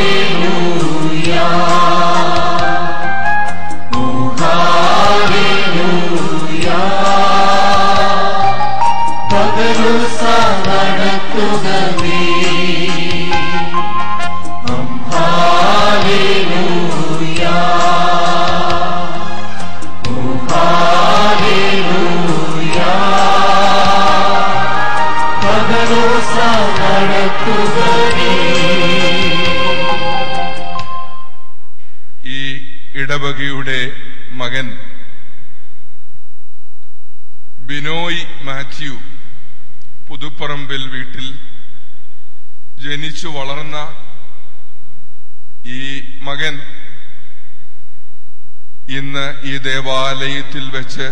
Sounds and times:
Music: 0.0 - 32.0.

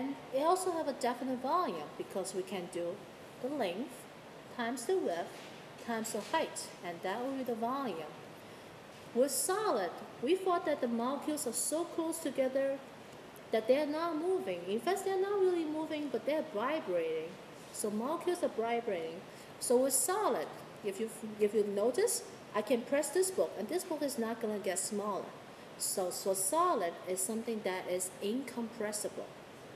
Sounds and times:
Female speech, woman speaking: 0.0 - 8.2, 9.2 - 12.8, 13.5 - 29.4.

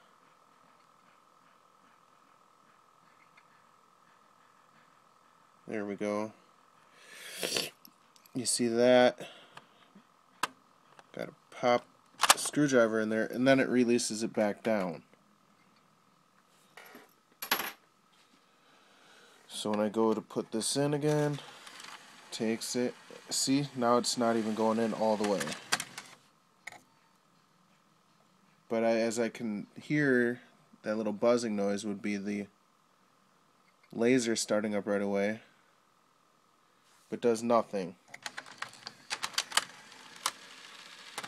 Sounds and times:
Speech: 5.7 - 6.4, 8.4 - 9.2, 11.1 - 15.1, 19.5 - 21.4, 22.3 - 25.6, 28.7 - 32.6, 33.9 - 35.5, 37.1 - 38.0.

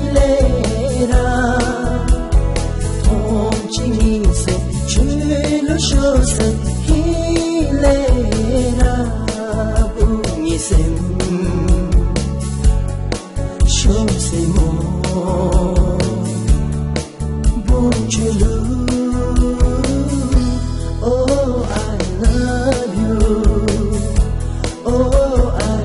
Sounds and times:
Blues: 0.0 - 25.8.

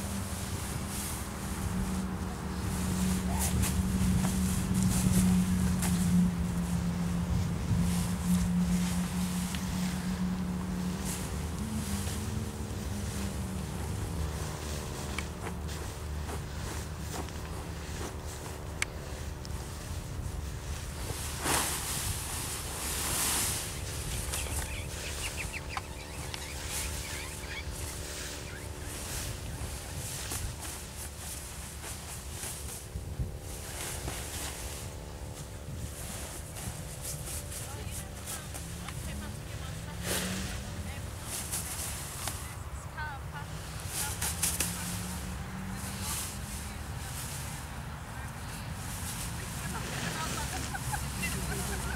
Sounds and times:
Turkey: 24.1 - 28.9.

